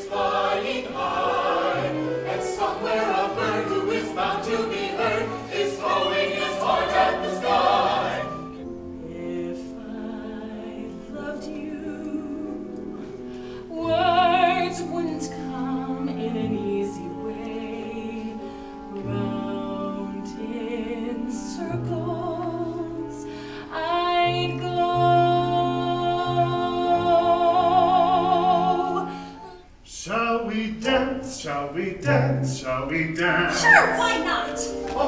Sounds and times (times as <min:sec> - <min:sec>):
Music: 0:00.0 - 0:35.0.